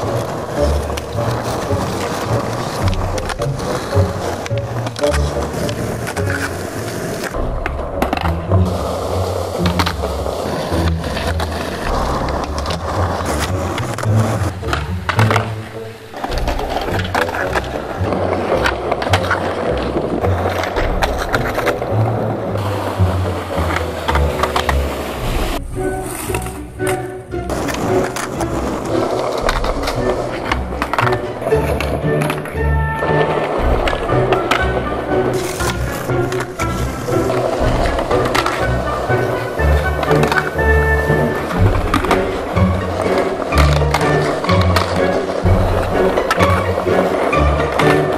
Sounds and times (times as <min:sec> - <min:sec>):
Music: 0:00.0 - 0:48.1
Skateboard: 0:00.0 - 0:48.1.